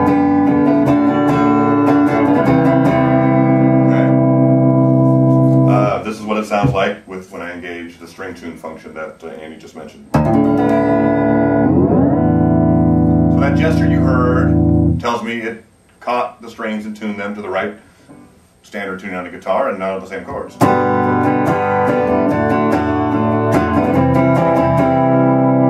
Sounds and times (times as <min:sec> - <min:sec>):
Electronic tuner: 0:00.0 - 0:06.0, 0:10.1 - 0:15.1, 0:20.5 - 0:25.7
Guitar: 0:00.0 - 0:18.5, 0:19.8 - 0:25.7
Inside, small room: 0:00.0 - 0:25.7
Speech: 0:03.9 - 0:04.2, 0:05.7 - 0:10.2, 0:13.3 - 0:17.8, 0:18.6 - 0:20.7.